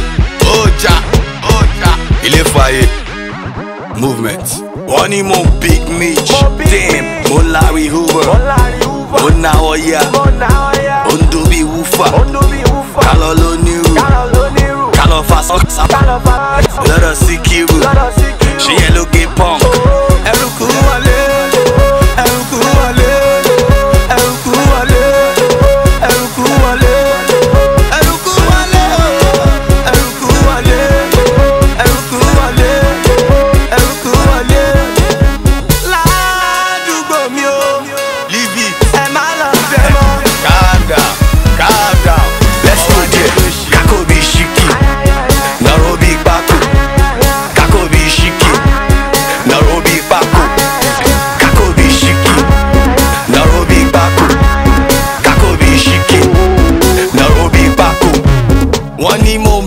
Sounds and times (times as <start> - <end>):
Music: 0.0 - 59.6.